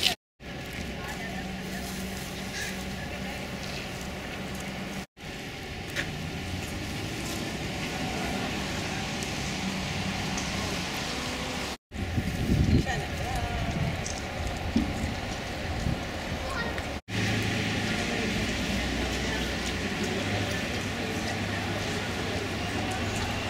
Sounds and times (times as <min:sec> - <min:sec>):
Speech: 0:00.9 - 0:04.7, 0:12.7 - 0:14.0, 0:17.8 - 0:23.5.